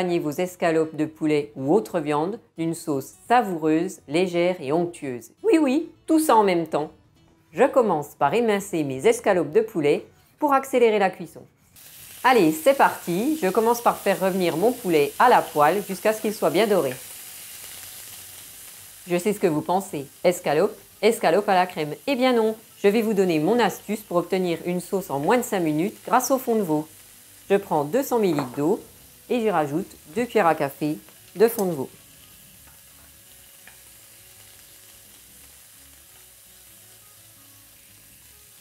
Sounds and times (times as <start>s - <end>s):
Speech: 0.0s - 6.9s, 7.6s - 11.5s, 12.3s - 17.0s, 19.1s - 26.9s, 27.5s - 32.0s.